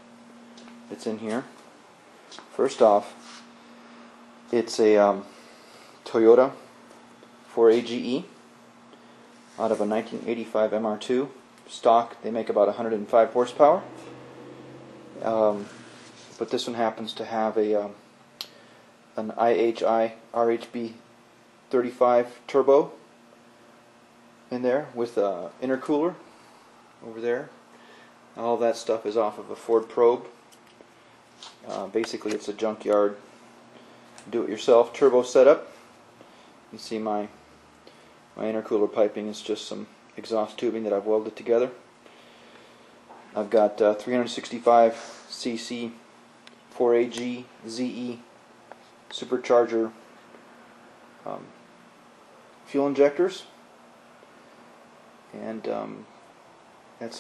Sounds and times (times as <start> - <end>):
Speech: 0.9 - 1.6, 2.5 - 3.2, 4.5 - 5.3, 6.0 - 6.6, 7.5 - 8.4, 9.6 - 13.9, 15.2 - 15.7, 16.4 - 18.0, 19.2 - 21.0, 21.7 - 23.0, 24.5 - 26.2, 27.0 - 27.6, 28.4 - 30.4, 31.6 - 33.2, 34.2 - 35.7, 36.7 - 37.4, 38.4 - 41.8, 43.4 - 46.0, 46.8 - 48.3, 49.1 - 50.0, 51.2 - 51.6, 52.7 - 53.6, 55.3 - 56.1, 57.0 - 57.2.